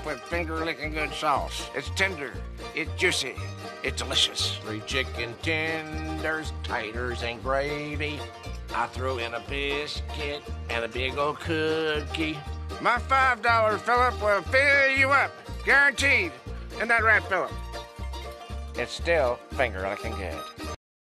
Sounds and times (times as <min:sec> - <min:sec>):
Speech: 0:00.0 - 0:08.2, 0:08.8 - 0:17.5, 0:18.8 - 0:20.4
Music: 0:00.0 - 0:20.8.